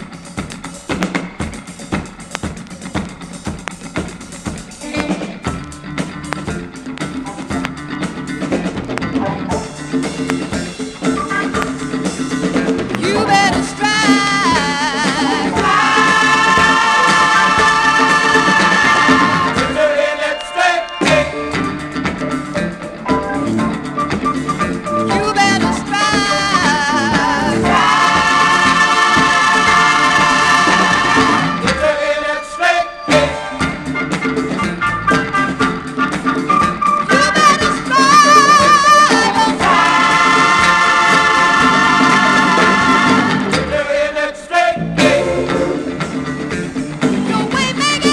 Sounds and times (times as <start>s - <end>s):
Funk: 0.0s - 20.0s, 33.1s - 48.1s
Gospel music: 0.0s - 48.1s
Singing: 12.5s - 21.6s, 24.6s - 33.6s, 37.1s - 45.7s.